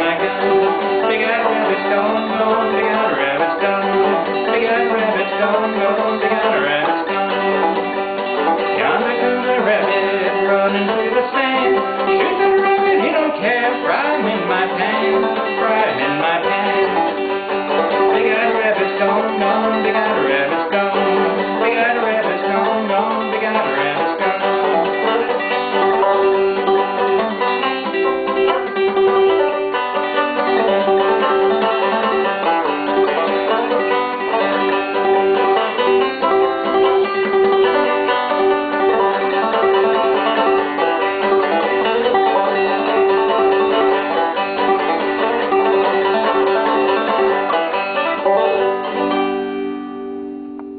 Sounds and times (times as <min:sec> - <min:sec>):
Banjo: 0:00.0 - 0:50.7.